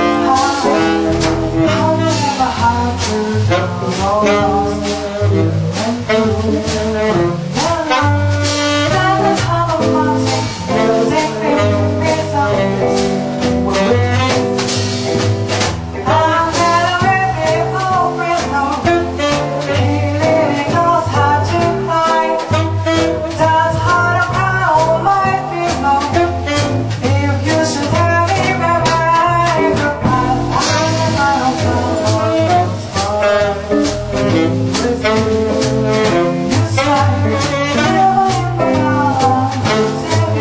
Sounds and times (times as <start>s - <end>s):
Music: 0.0s - 40.4s.